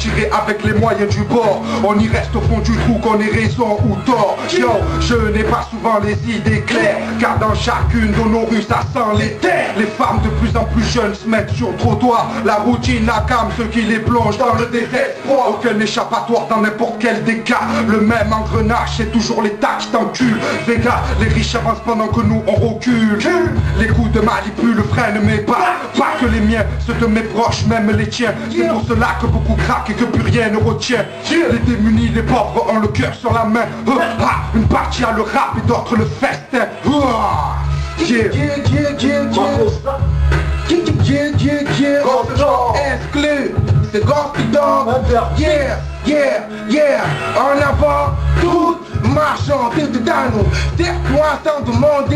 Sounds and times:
Music: 0.0s - 52.1s.

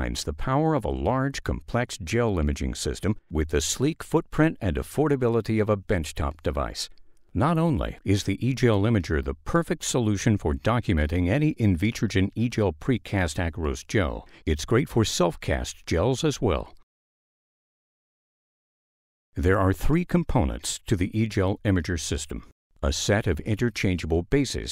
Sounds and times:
Speech: 0.0s - 16.8s, 19.4s - 24.7s.

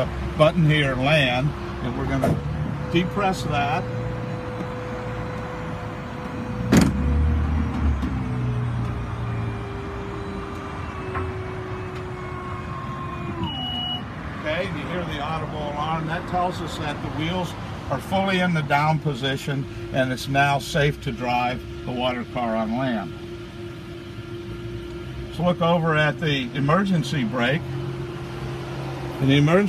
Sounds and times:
Outside, urban or manmade: 0.0s - 29.6s
Vehicle: 0.0s - 29.6s.

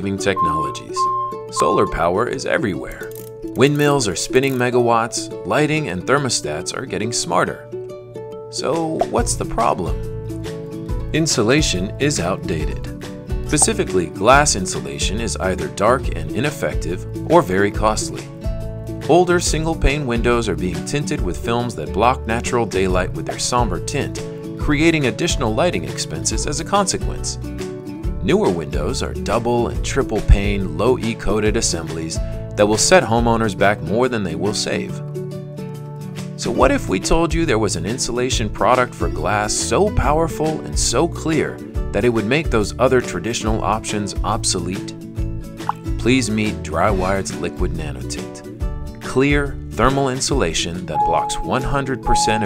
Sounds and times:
Speech: 0.0s - 7.6s, 8.5s - 10.0s, 11.1s - 12.9s, 13.5s - 18.3s, 19.1s - 27.4s, 28.2s - 35.0s, 36.4s - 45.0s, 46.0s - 52.4s
Music: 0.0s - 52.4s.

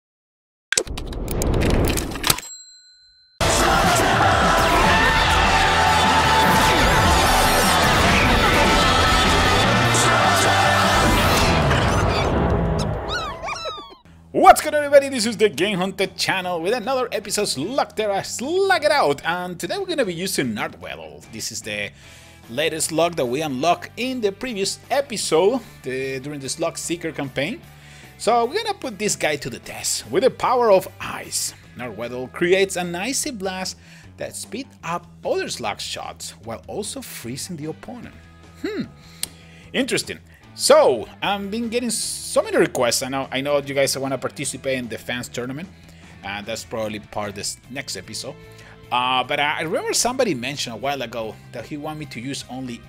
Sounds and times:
Music: 3.4s - 52.8s.

